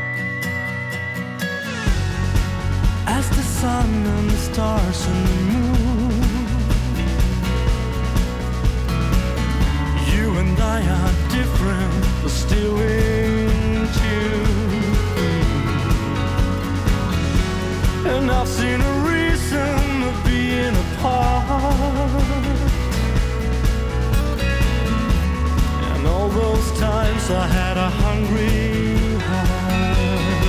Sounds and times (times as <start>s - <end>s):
Musical instrument: 0.0s - 30.4s.